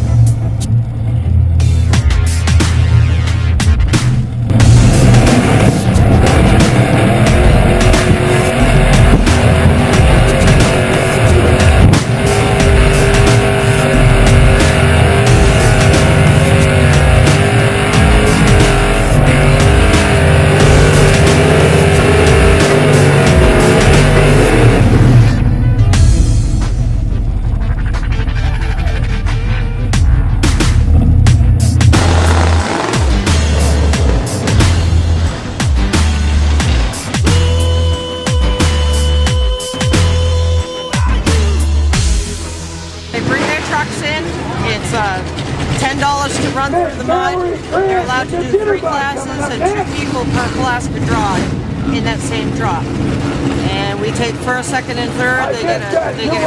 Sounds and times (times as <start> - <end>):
Music: 0.0 - 56.4.